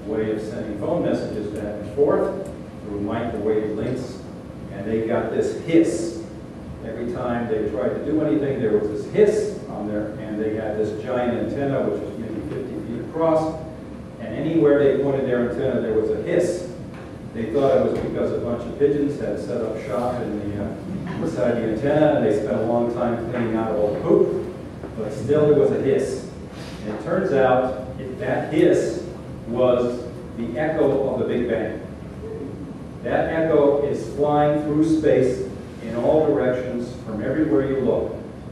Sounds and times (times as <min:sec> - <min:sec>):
Speech: 0:00.0 - 0:38.3.